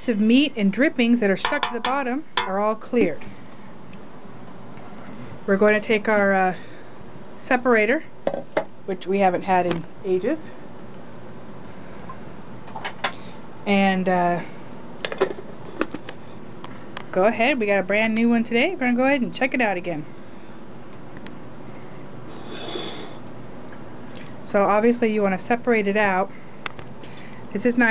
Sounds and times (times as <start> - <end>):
Speech: 0.0 - 3.3, 5.5 - 6.6, 7.4 - 8.1, 8.9 - 10.6, 13.7 - 14.5, 17.1 - 20.1, 24.5 - 26.3, 27.5 - 27.9.